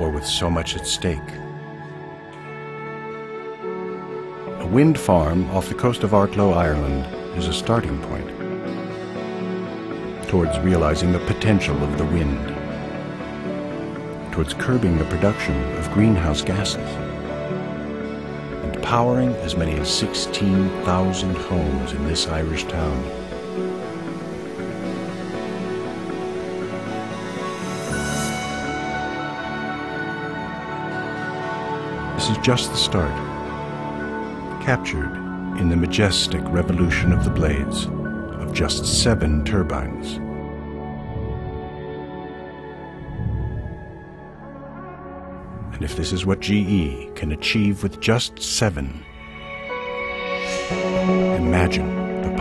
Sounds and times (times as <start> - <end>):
Speech: 0.0 - 1.4, 4.6 - 8.4, 10.2 - 12.6, 14.3 - 17.0, 18.6 - 23.2, 32.2 - 33.3, 34.6 - 40.2, 45.7 - 49.1, 51.3 - 52.4
Music: 0.0 - 52.4.